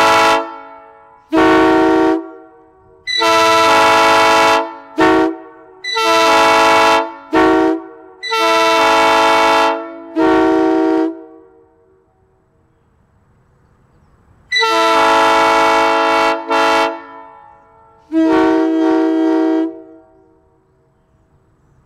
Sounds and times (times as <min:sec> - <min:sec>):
Vehicle horn, car horn, honking: 0:00.0 - 0:11.6, 0:14.5 - 0:20.2
Train horn: 0:00.0 - 0:12.4, 0:14.5 - 0:20.5.